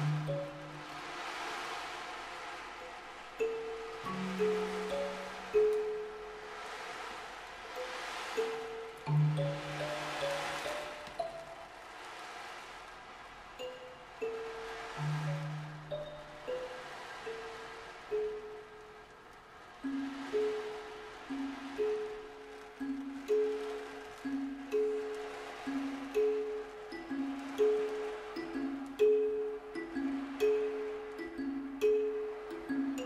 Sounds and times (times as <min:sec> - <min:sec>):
Percussion: 0:00.0 - 0:33.0.